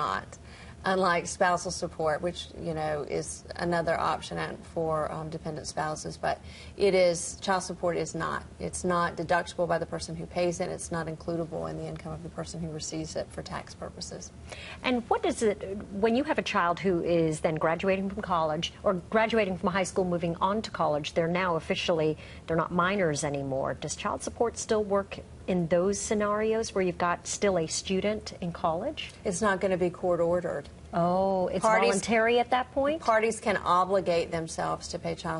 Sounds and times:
Conversation: 0:00.0 - 0:35.4
Female speech, woman speaking: 0:00.0 - 0:35.4.

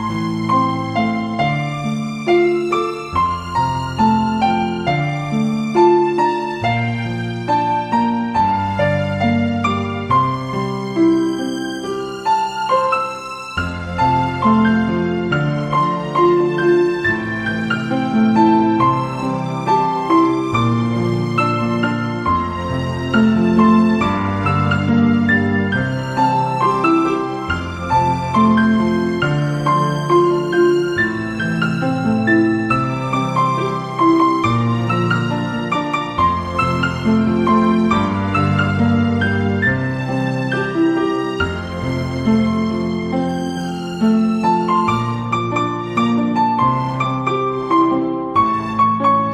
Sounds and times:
Music: 0:00.0 - 0:49.3.

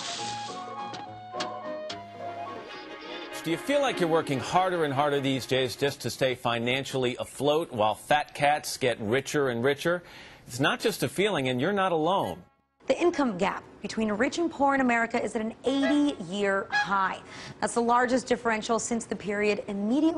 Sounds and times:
Speech: 0:03.4 - 0:20.1.

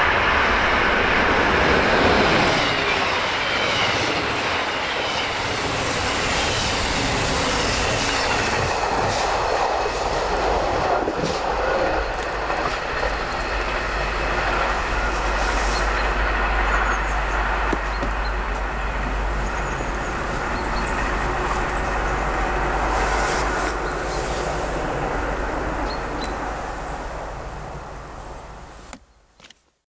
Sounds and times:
Railroad car, train wagon: 0:00.0 - 0:29.6
Train: 0:00.0 - 0:29.8.

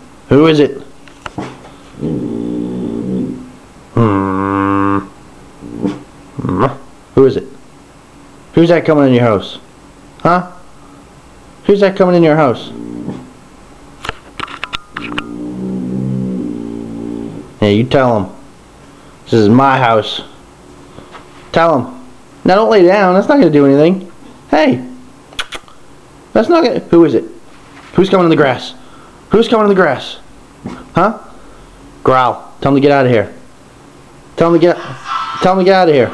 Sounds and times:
Speech: 0:00.3 - 0:00.9, 0:06.4 - 0:07.6, 0:08.5 - 0:10.6, 0:11.6 - 0:12.8, 0:17.6 - 0:18.4, 0:19.3 - 0:20.4, 0:21.5 - 0:25.0, 0:26.4 - 0:27.4, 0:28.0 - 0:30.3, 0:30.9 - 0:31.3, 0:32.0 - 0:33.5, 0:34.4 - 0:36.1.

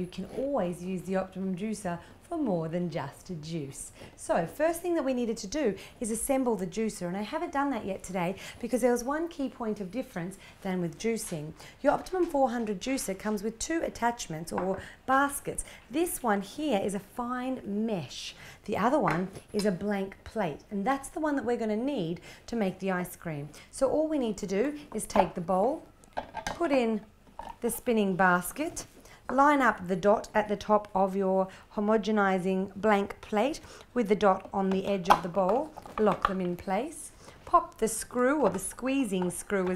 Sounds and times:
Speech: 0:00.0 - 0:25.9, 0:26.6 - 0:39.7.

